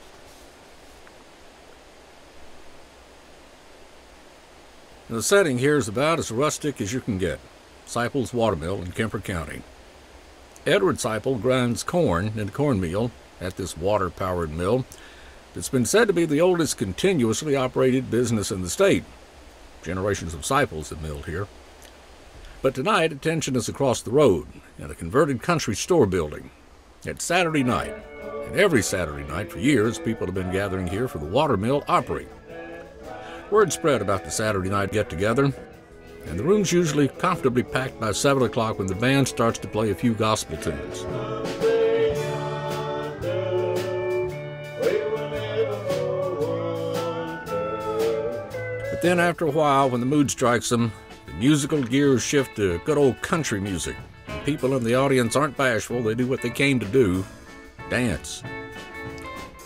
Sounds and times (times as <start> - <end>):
Speech: 5.1 - 9.6, 10.6 - 14.9, 15.6 - 19.1, 19.8 - 21.5, 22.6 - 26.5, 27.1 - 32.3, 33.5 - 35.6, 36.3 - 41.0, 49.0 - 57.3, 57.9 - 58.4.